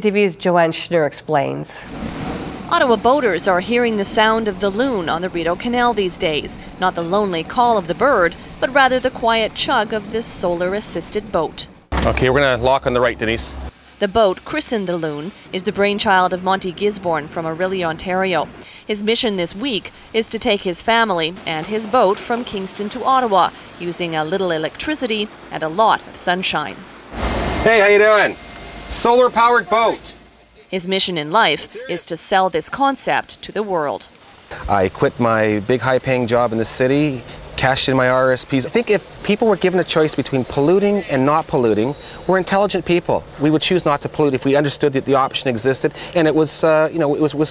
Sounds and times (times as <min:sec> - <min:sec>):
Speech: 0:00.0 - 0:01.8, 0:02.7 - 0:26.8, 0:27.7 - 0:47.5.